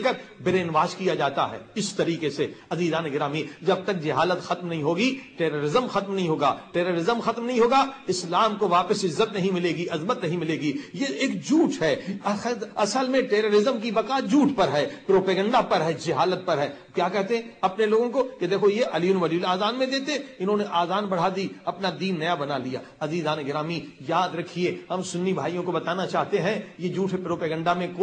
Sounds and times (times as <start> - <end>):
Speech: 0.0 - 28.0.